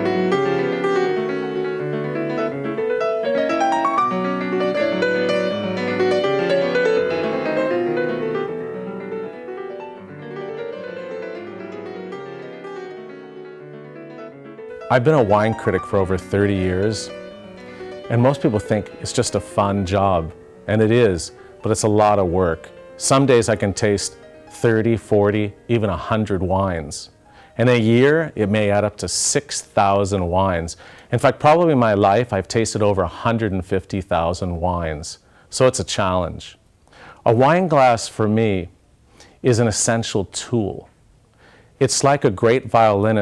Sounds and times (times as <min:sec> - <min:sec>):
Music: 0:00.0 - 0:34.1, 0:41.8 - 0:43.2
Speech: 0:14.9 - 0:17.1, 0:18.1 - 0:36.6, 0:37.2 - 0:38.8, 0:39.4 - 0:41.0, 0:41.8 - 0:43.2.